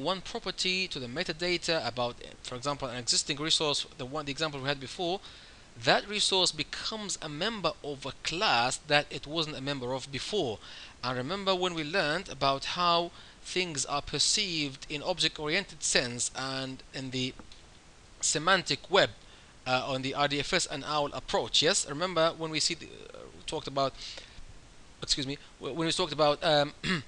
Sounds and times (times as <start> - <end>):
Speech: 0.0 - 5.2, 5.8 - 17.4, 18.2 - 24.0, 25.0 - 27.0.